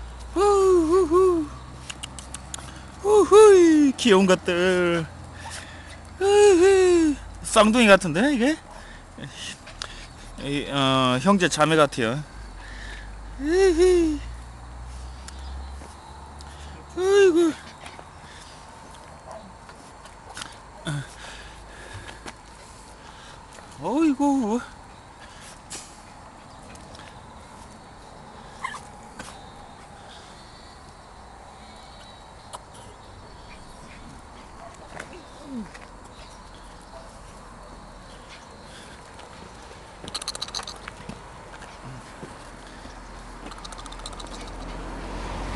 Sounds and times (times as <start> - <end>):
Speech: 3.0 - 5.1, 6.2 - 8.6, 10.4 - 12.3, 13.4 - 14.3, 17.0 - 17.6, 23.8 - 24.8.